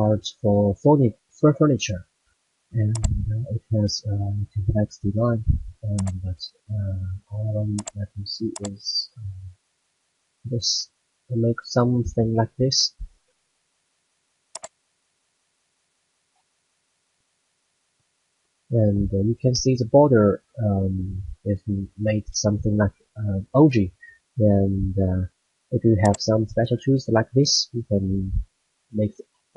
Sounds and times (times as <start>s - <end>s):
Speech: 0.0s - 2.0s, 2.8s - 9.5s, 10.5s - 13.0s, 18.7s - 28.4s, 29.0s - 29.5s.